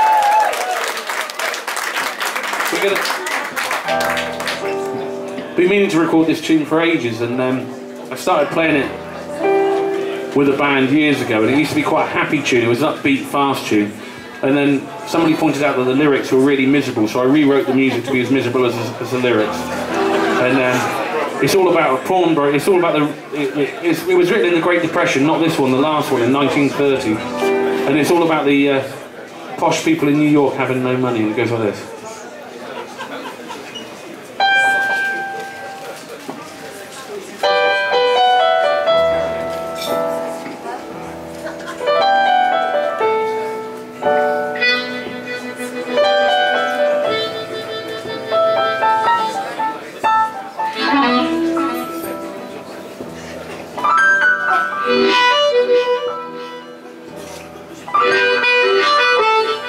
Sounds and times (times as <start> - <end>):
Speech: 2.7 - 3.3, 5.6 - 9.0, 10.3 - 34.4
Music: 3.8 - 28.9, 34.4 - 36.3, 37.4 - 59.6.